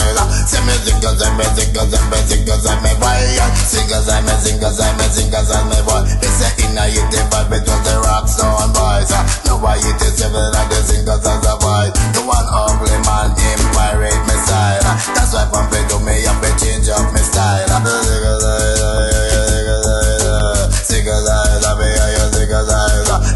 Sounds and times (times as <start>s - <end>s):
Music: 0.0s - 23.3s.